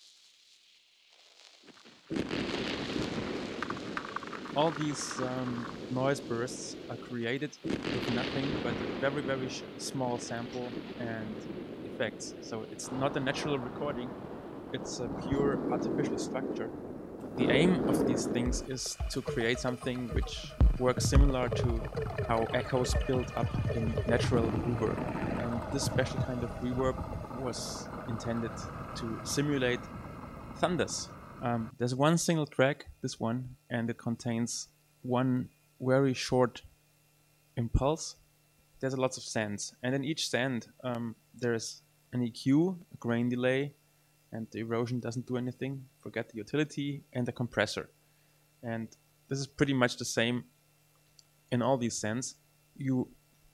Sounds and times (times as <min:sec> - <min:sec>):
Speech: 0:04.6 - 0:11.4, 0:12.0 - 0:14.1, 0:14.8 - 0:16.7, 0:17.4 - 0:29.8, 0:30.6 - 0:36.7, 0:37.6 - 0:38.2, 0:38.8 - 0:43.8, 0:44.4 - 0:47.9, 0:48.6 - 0:50.5, 0:51.5 - 0:53.2.